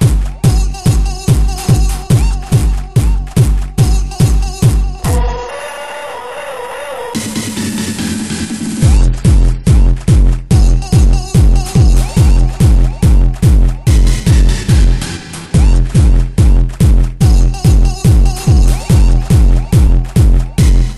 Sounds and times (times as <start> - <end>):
Techno: 0.0 - 20.9.